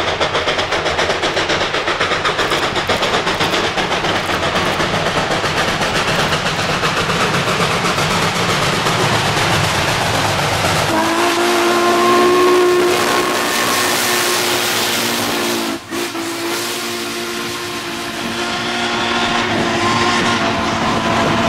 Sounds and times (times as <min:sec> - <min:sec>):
Clickety-clack: 0:00.0 - 0:21.4
Railroad car, train wagon: 0:00.0 - 0:21.4
Train whistle: 0:10.9 - 0:21.4.